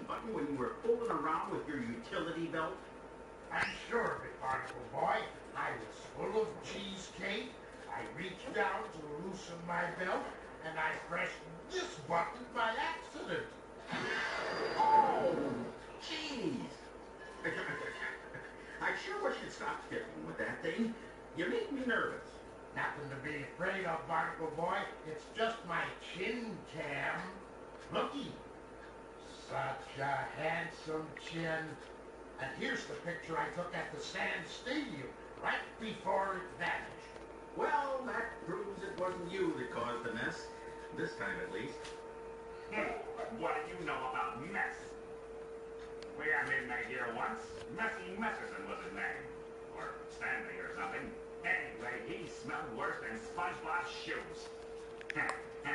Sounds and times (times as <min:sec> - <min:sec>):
Speech: 0:00.0 - 0:02.9, 0:03.5 - 0:13.6, 0:14.9 - 0:28.5, 0:29.2 - 0:42.0, 0:42.7 - 0:45.0, 0:46.1 - 0:55.7.